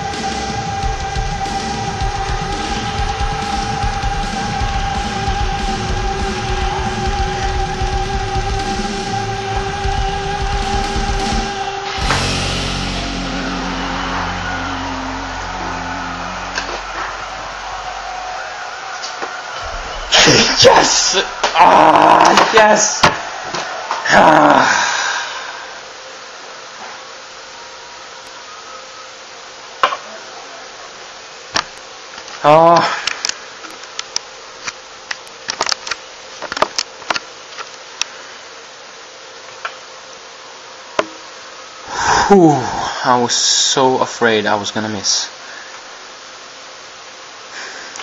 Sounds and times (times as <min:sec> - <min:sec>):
Speech: 0:20.2 - 0:23.1, 0:42.2 - 0:45.4.